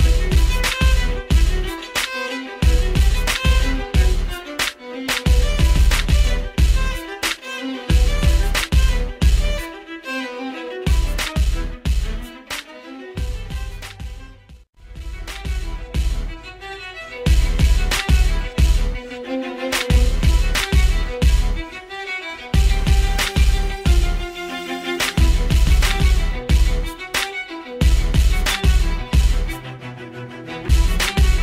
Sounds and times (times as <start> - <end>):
Violin, fiddle: 0.0 - 31.4.